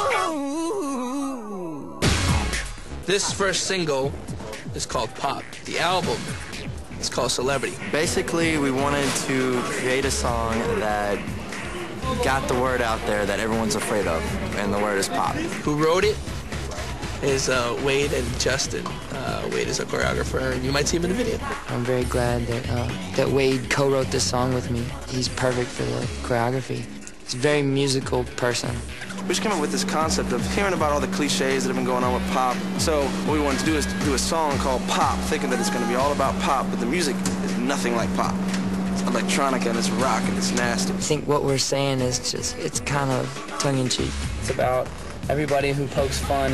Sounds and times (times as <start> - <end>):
Music: 0.0 - 46.5
Speech: 3.1 - 4.1, 4.7 - 6.3, 7.0 - 11.2, 12.0 - 16.2, 17.2 - 38.4, 39.0 - 46.5.